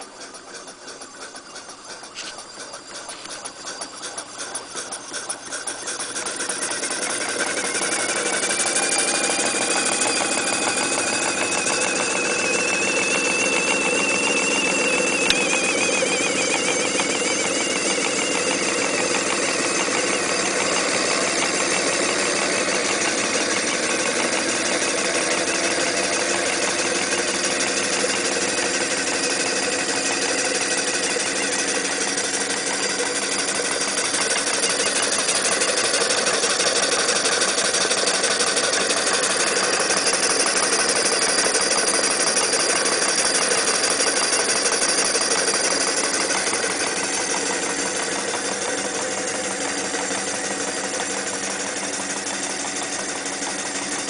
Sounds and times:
Idling: 0:00.0 - 0:54.0
Medium engine (mid frequency): 0:00.0 - 0:54.0.

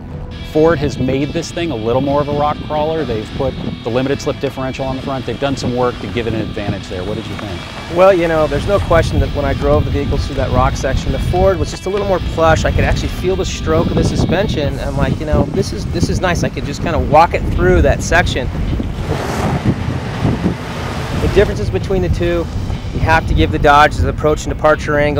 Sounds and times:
Speech: 0:00.5 - 0:18.5, 0:21.2 - 0:25.2
Car: 0:01.3 - 0:12.9, 0:14.8 - 0:24.2.

